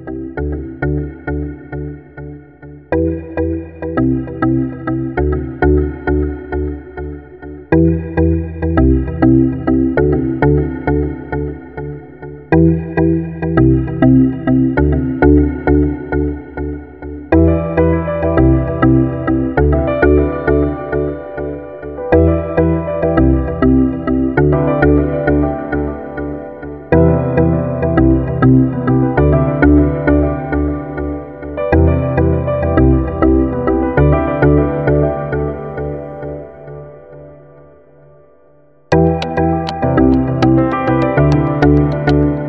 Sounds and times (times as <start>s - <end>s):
Music: 0.0s - 42.4s.